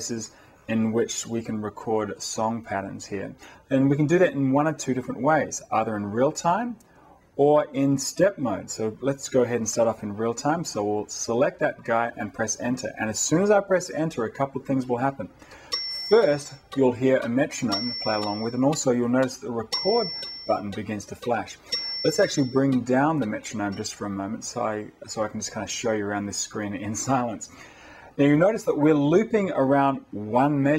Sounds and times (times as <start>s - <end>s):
Speech: 0.0s - 6.8s, 7.4s - 15.4s, 16.0s - 27.5s, 28.2s - 30.7s.